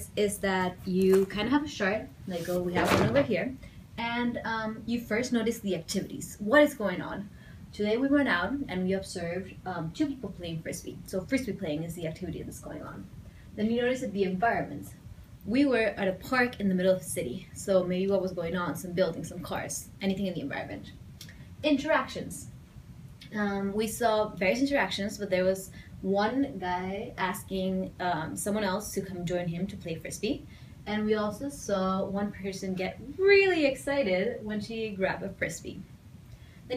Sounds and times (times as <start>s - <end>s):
Speech: 0.0s - 21.0s, 21.6s - 22.5s, 23.2s - 35.9s.